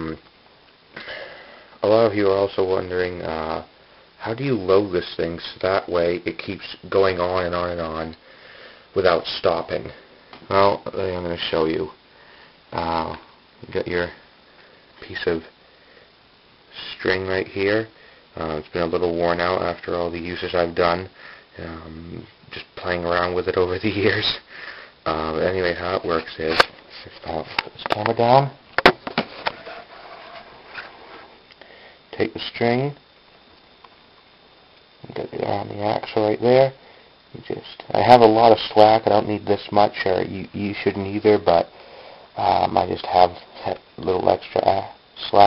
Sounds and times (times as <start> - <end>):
Speech: 0.0 - 0.2, 1.8 - 8.2, 9.0 - 12.0, 12.7 - 14.2, 15.0 - 15.5, 16.7 - 24.5, 25.1 - 28.6, 32.1 - 33.0, 35.0 - 41.7, 42.4 - 45.4.